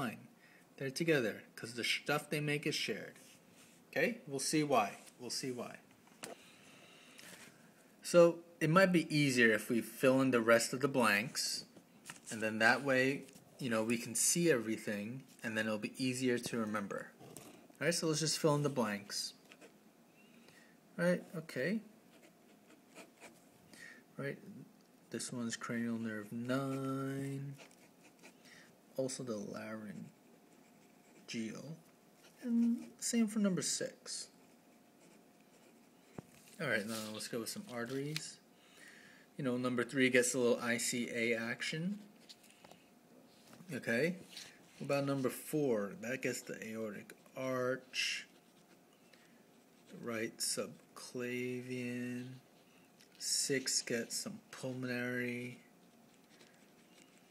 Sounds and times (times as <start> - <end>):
Speech: 21.0 - 21.9, 29.0 - 30.1, 31.3 - 31.8, 36.6 - 38.4, 43.7 - 48.3, 49.9 - 52.4, 53.2 - 55.7
Writing: 22.1 - 23.4, 26.2 - 28.7, 29.8 - 33.0, 34.3 - 37.1, 46.3 - 50.0, 54.6 - 57.3.